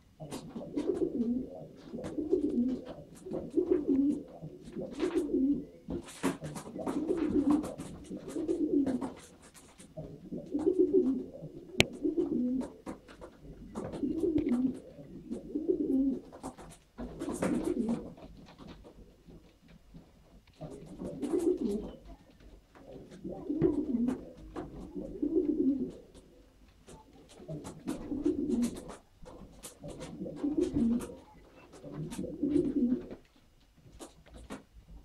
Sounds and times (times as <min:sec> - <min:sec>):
Inside, small room: 0:00.0 - 0:35.0
Pigeon, dove: 0:00.0 - 0:35.0.